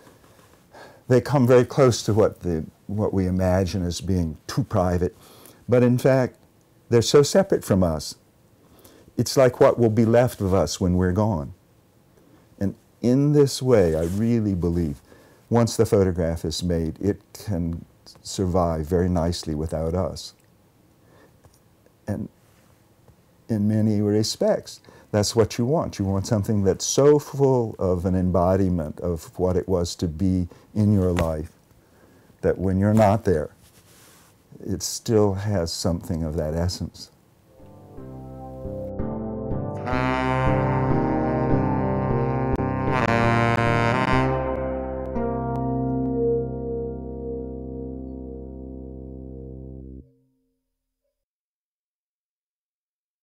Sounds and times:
Synthesizer: 37.5 - 50.2.

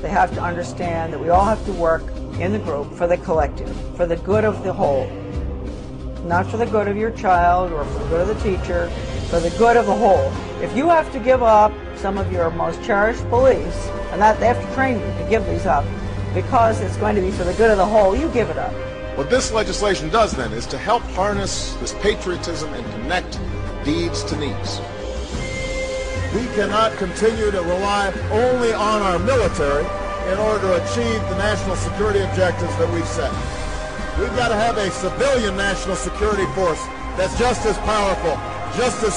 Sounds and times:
Speech: 0.0 - 5.1, 6.3 - 15.8, 16.4 - 24.8, 34.2 - 39.1
Music: 0.0 - 39.1.

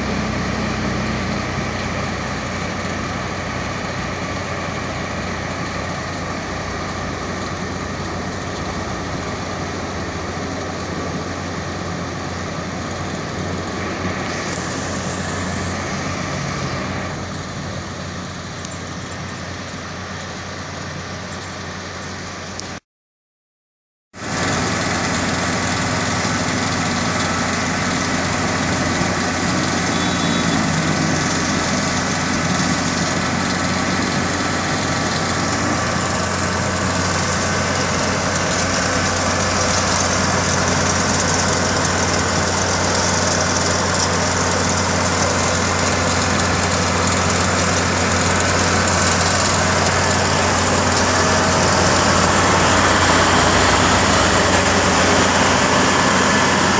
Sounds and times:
Truck: 0.0 - 22.8, 24.2 - 56.8.

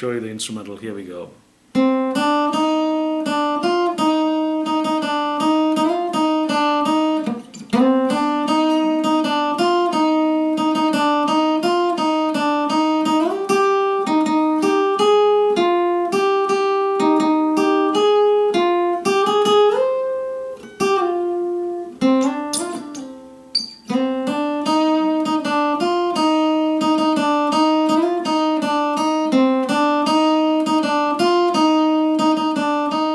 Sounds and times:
Acoustic guitar: 1.4 - 33.1.

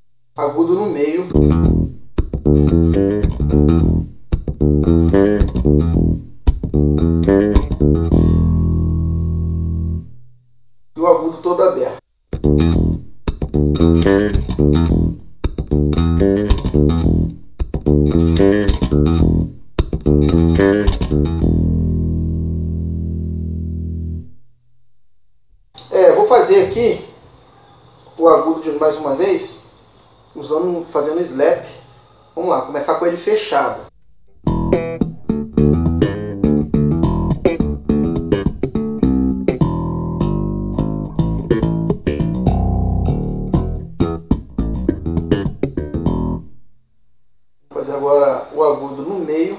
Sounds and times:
Bass guitar: 1.3 - 10.4, 12.3 - 24.6, 34.3 - 46.7.

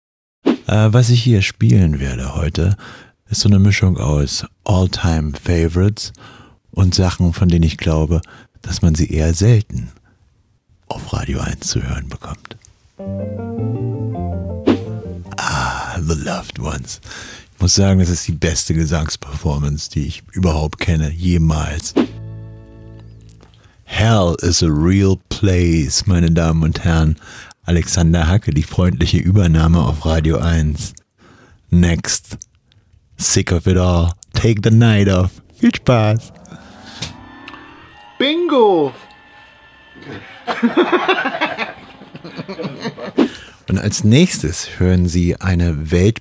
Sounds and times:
Speech: 0.7 - 10.0, 10.9 - 12.6, 15.4 - 17.0, 17.6 - 22.0, 23.9 - 31.0, 31.7 - 32.4, 33.2 - 36.4, 38.2 - 39.0, 43.7 - 46.2
Music: 13.0 - 15.4, 22.0 - 23.6, 37.2 - 43.4.

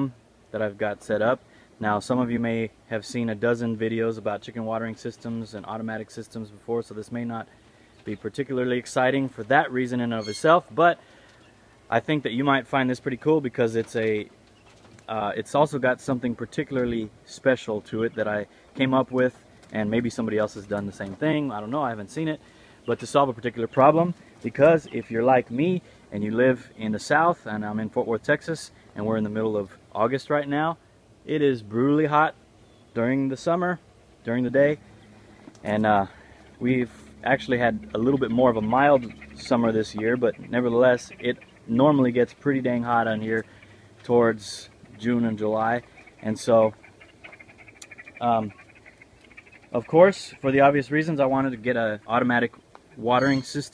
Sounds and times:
Speech: 0.0 - 11.0, 11.9 - 14.3, 15.0 - 32.4, 33.0 - 34.8, 35.6 - 46.8, 48.2 - 48.6, 49.7 - 53.7.

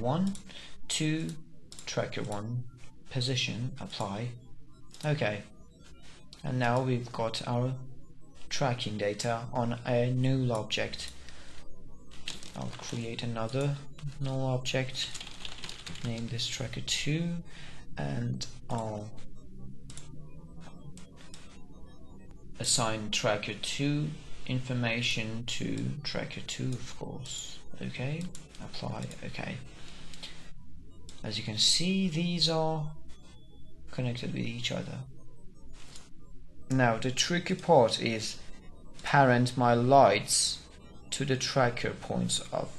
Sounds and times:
Typing: 15.0 - 16.3.

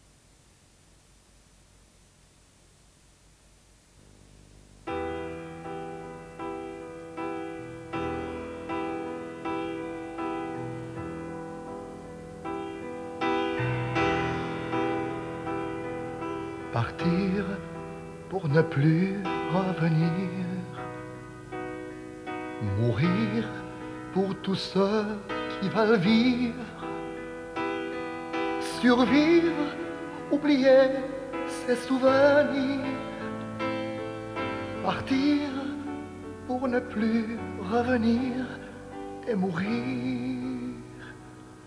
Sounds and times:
Music: 4.8 - 41.6.

